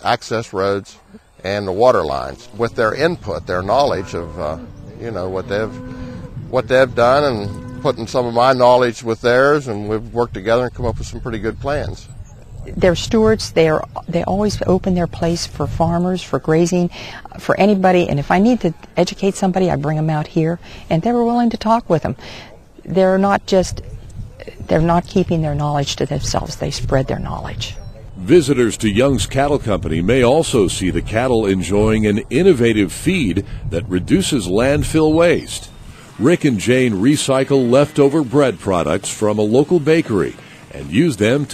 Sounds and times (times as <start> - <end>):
Speech: 0.0 - 5.8, 6.5 - 22.2, 22.8 - 41.5.